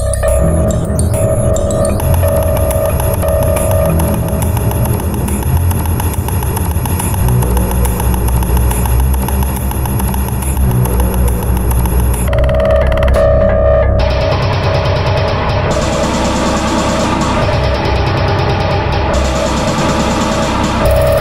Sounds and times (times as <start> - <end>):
Sound effect: 0.0 - 21.2
Soundtrack music: 0.0 - 21.2.